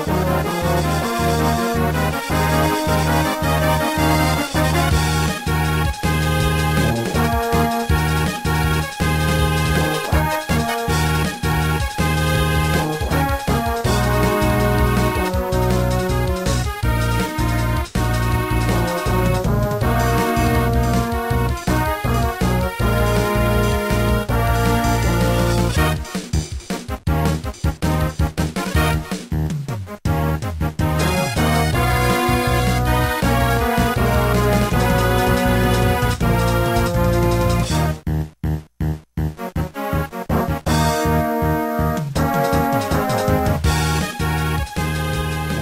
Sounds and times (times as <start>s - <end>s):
Soundtrack music: 0.0s - 26.4s, 27.1s - 45.6s.